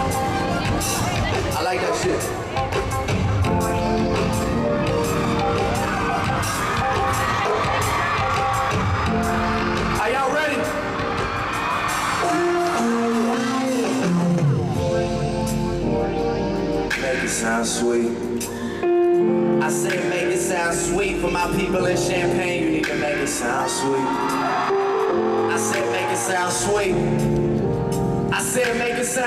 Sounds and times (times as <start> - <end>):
Music: 0.0 - 29.2.